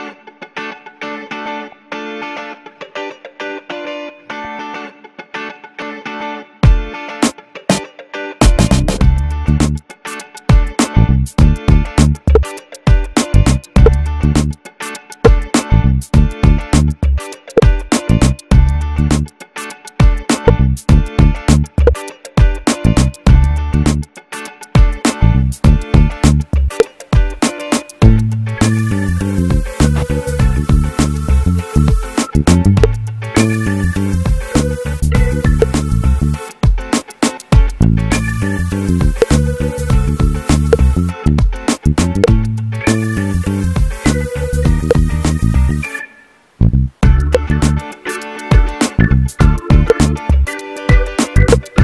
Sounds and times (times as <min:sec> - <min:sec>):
Music: 0:00.0 - 0:51.8.